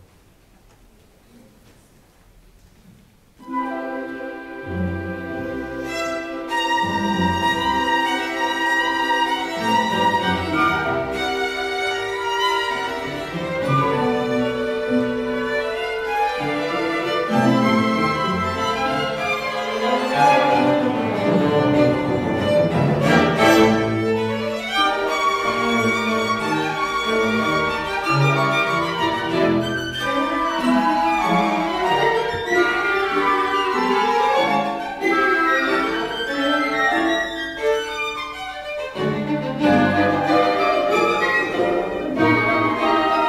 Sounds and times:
Violin, fiddle: 0:04.7 - 0:43.2.

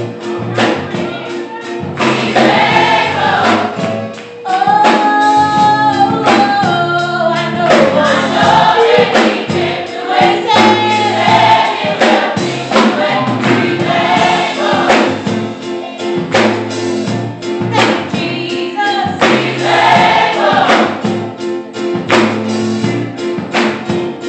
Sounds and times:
Choir: 0:02.1 - 0:03.8, 0:07.2 - 0:15.3, 0:18.2 - 0:21.1
Female singing: 0:04.5 - 0:08.3, 0:17.8 - 0:19.2.

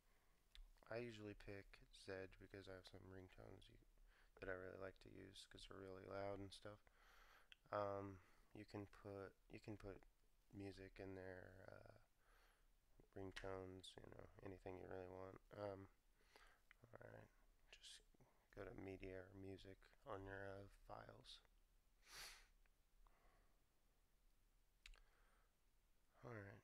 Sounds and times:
Speech: 0:00.8 - 0:06.8, 0:07.6 - 0:12.1, 0:13.0 - 0:16.0, 0:16.7 - 0:21.5, 0:26.2 - 0:26.6.

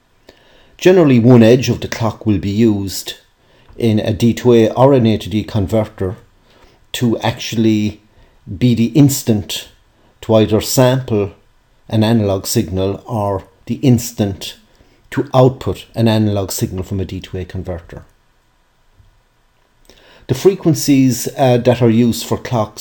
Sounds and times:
Speech: 0:00.8 - 0:06.3, 0:06.9 - 0:18.2, 0:20.3 - 0:22.8.

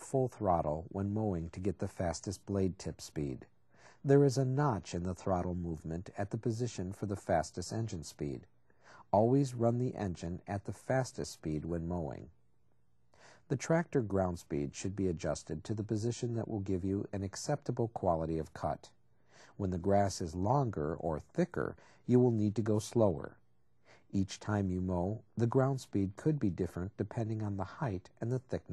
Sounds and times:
Speech: 0:00.0 - 0:12.4, 0:13.4 - 0:23.4, 0:24.0 - 0:28.7.

